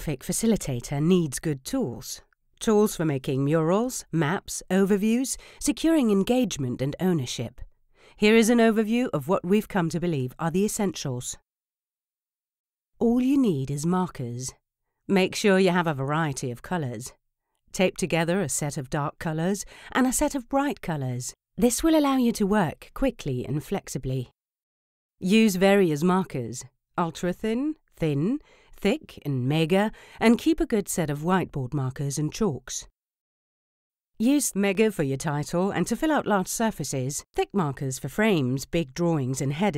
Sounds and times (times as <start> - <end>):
Speech: 0.0 - 11.4, 13.0 - 24.4, 25.2 - 32.9, 34.2 - 39.7.